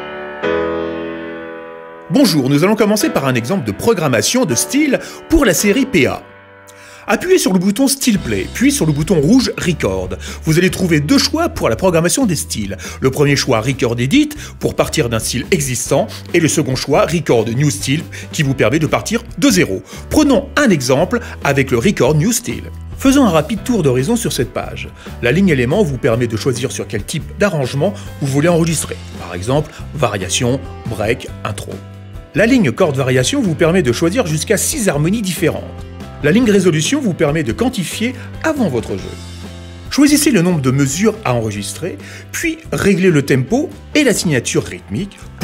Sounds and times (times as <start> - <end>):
Music: 0.0 - 45.4
Speech: 2.1 - 6.2, 7.1 - 31.8, 32.4 - 39.2, 39.9 - 45.4.